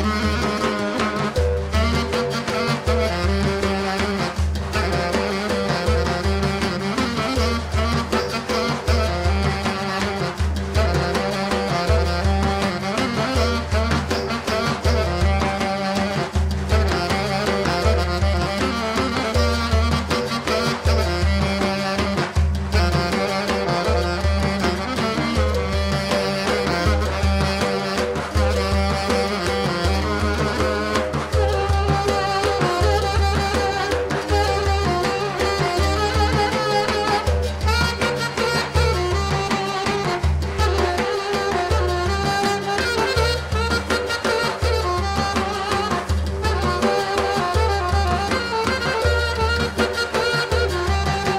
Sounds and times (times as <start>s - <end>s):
Drum: 0.0s - 51.3s
Folk music: 0.0s - 51.3s.